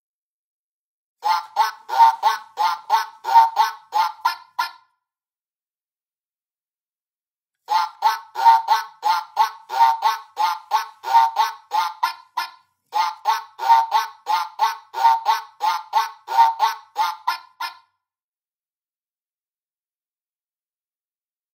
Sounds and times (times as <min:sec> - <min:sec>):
Quack: 0:01.2 - 0:04.9, 0:07.7 - 0:17.9.